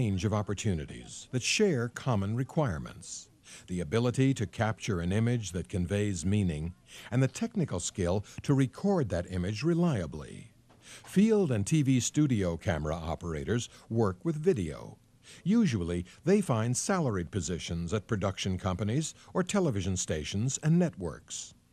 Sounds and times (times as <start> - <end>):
Speech: 0.0 - 21.6.